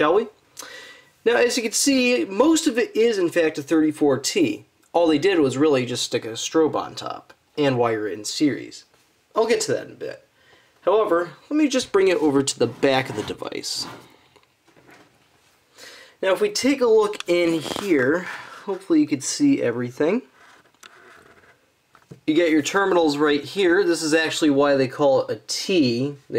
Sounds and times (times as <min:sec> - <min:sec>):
Speech: 0:00.0 - 0:00.4, 0:01.2 - 0:14.1, 0:16.2 - 0:20.3, 0:22.2 - 0:26.3.